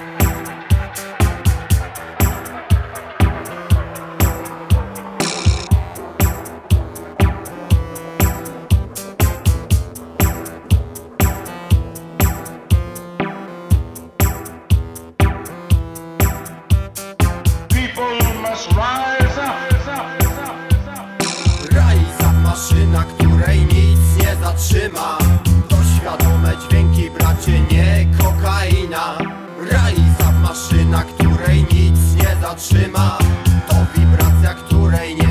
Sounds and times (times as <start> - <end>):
Sound effect: 0.0 - 9.5
Music: 0.0 - 35.3.